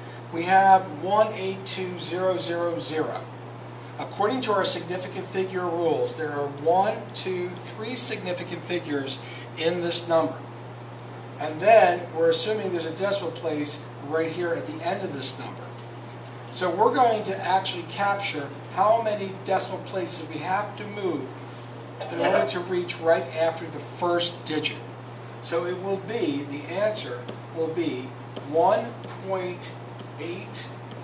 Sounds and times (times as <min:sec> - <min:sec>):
Speech: 0:00.3 - 0:03.3, 0:04.0 - 0:10.5, 0:11.4 - 0:15.8, 0:16.5 - 0:21.4, 0:22.0 - 0:30.8.